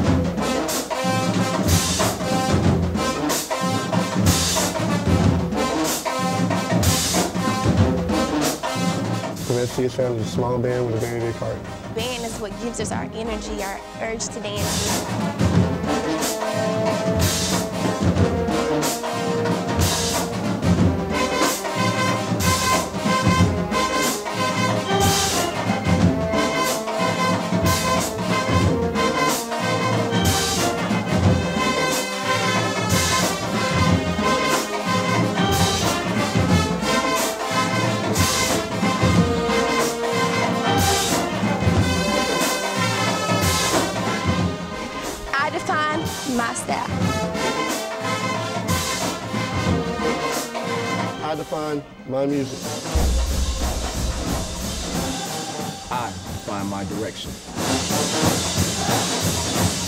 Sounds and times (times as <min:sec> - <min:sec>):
Traditional music: 0:00.0 - 0:59.8.